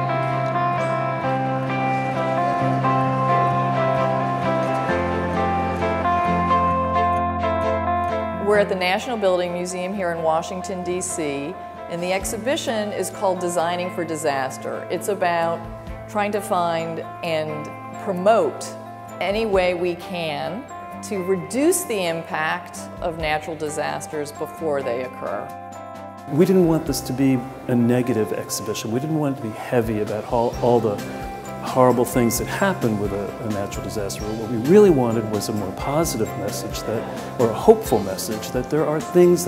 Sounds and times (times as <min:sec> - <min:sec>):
Music: 0:00.0 - 0:39.4
Speech: 0:08.4 - 0:15.6, 0:19.2 - 0:25.5, 0:26.3 - 0:31.0, 0:31.7 - 0:39.4.